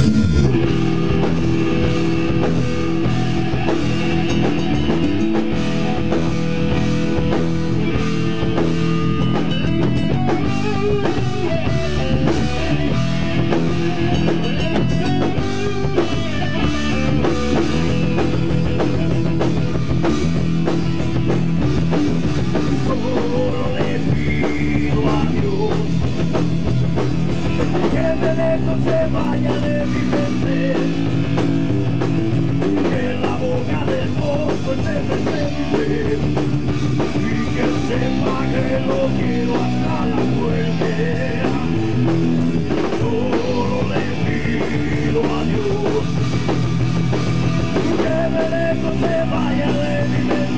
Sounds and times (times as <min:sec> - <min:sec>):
Music: 0:00.0 - 0:50.5.